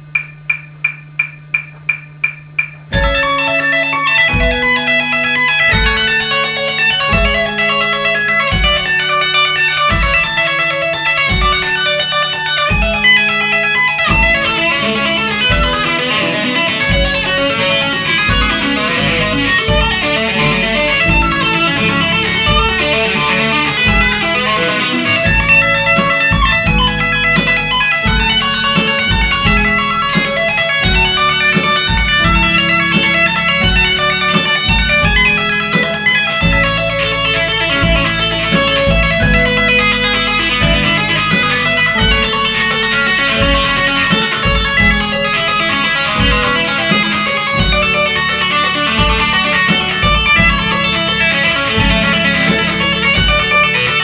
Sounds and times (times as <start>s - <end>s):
Electric guitar: 0.0s - 54.0s.